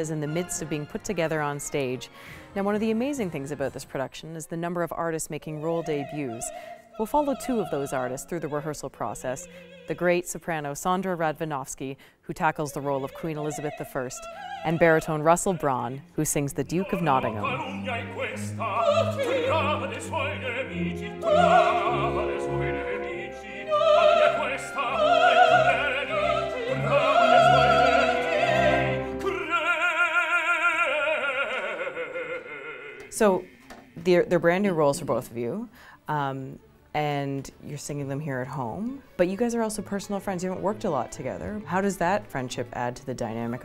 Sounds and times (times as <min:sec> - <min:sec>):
Opera: 0:00.0 - 0:43.6.